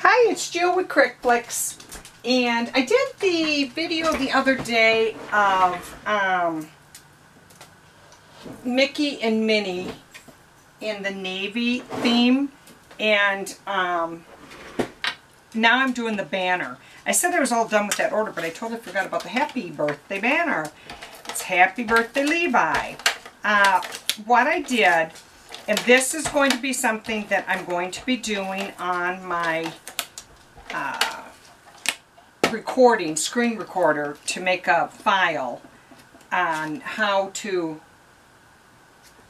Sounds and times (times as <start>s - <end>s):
Speech: 0.0s - 6.7s, 8.6s - 10.0s, 10.8s - 14.2s, 15.6s - 29.8s, 30.7s - 31.4s, 32.5s - 35.6s, 36.4s - 37.8s.